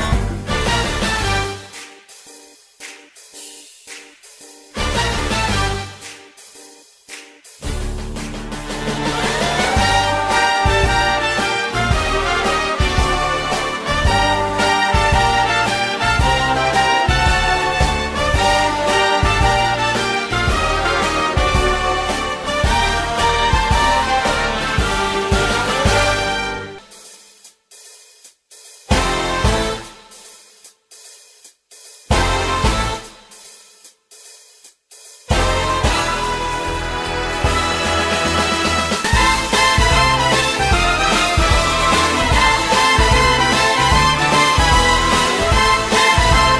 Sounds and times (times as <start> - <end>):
Music: 0.0 - 46.5.